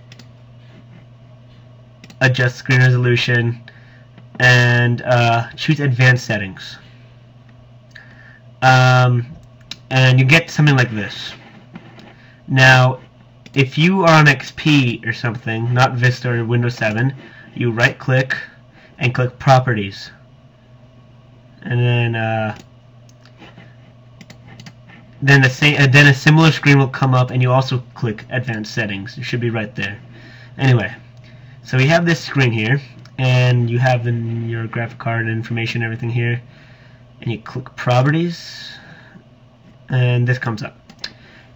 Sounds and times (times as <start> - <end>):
Speech: 2.2 - 3.6, 4.4 - 6.9, 8.6 - 11.4, 12.5 - 20.2, 21.6 - 22.6, 25.2 - 30.0, 30.6 - 36.5, 37.2 - 38.9, 39.9 - 40.8.